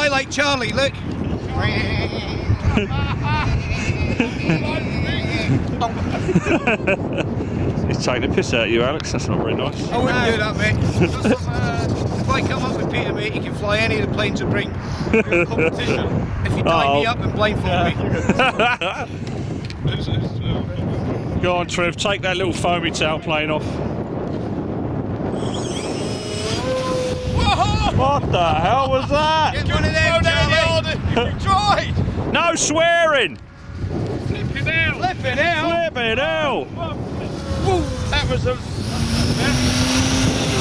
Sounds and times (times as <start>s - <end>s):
Wind noise (microphone): 0.0s - 40.6s.